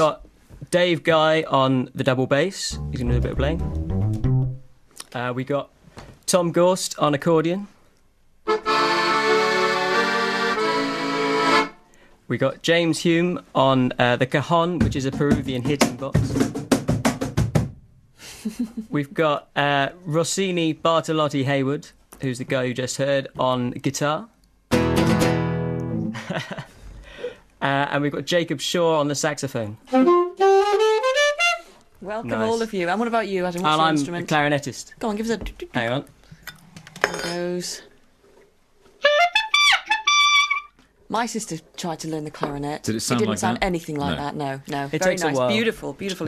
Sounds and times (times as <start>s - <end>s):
Accordion: 8.5s - 11.8s.